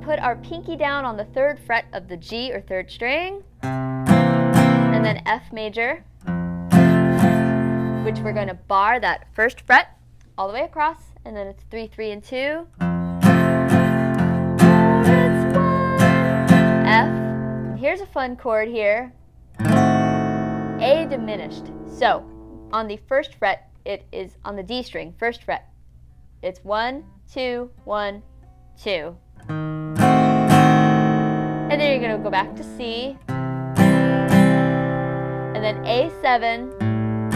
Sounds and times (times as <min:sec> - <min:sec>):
Guitar: 0:00.0 - 0:09.2, 0:12.7 - 0:25.0, 0:25.9 - 0:37.3.